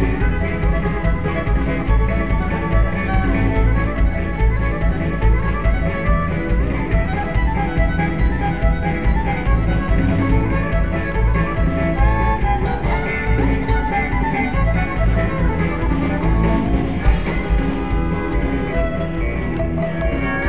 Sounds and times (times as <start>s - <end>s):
Funk: 0.0s - 20.4s.